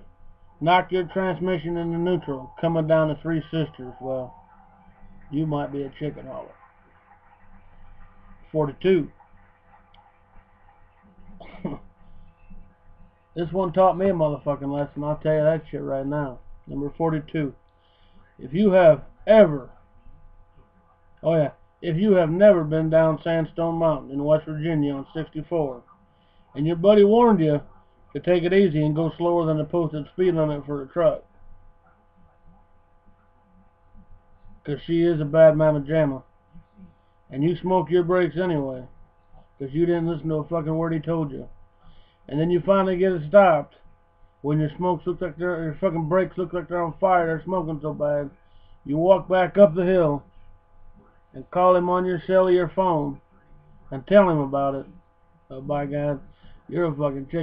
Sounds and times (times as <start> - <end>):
Speech: 0.0 - 9.3, 11.2 - 11.9, 13.4 - 17.6, 18.4 - 19.9, 21.2 - 25.9, 26.6 - 31.3, 34.6 - 41.5, 42.3 - 43.8, 44.5 - 50.3, 51.3 - 57.4.